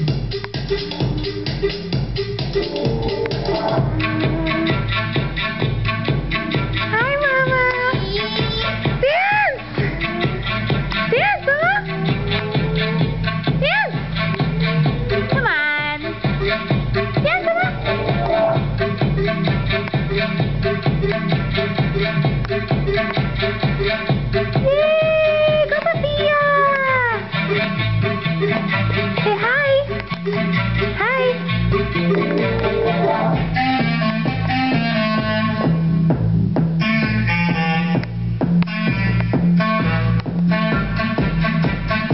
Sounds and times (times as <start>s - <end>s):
Music: 0.0s - 42.1s
Speech: 6.9s - 9.6s, 11.1s - 12.0s, 17.2s - 17.8s, 24.6s - 27.3s, 29.2s - 29.9s, 31.0s - 31.4s.